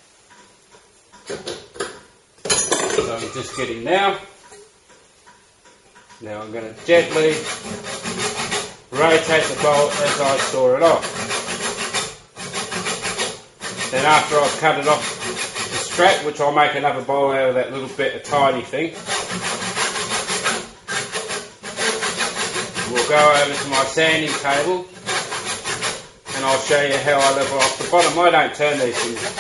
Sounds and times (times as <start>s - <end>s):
Speech: 3.0s - 4.3s, 6.2s - 7.4s, 9.0s - 11.0s, 13.9s - 15.0s, 15.8s - 19.0s, 22.8s - 24.9s, 26.3s - 29.4s.